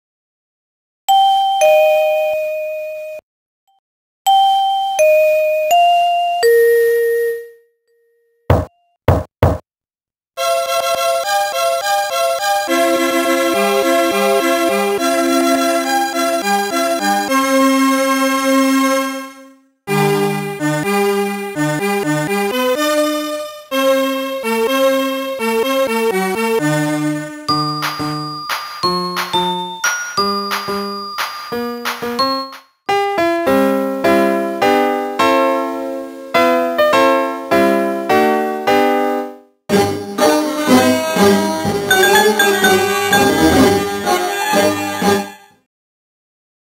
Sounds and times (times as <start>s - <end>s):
Music: 10.4s - 45.7s.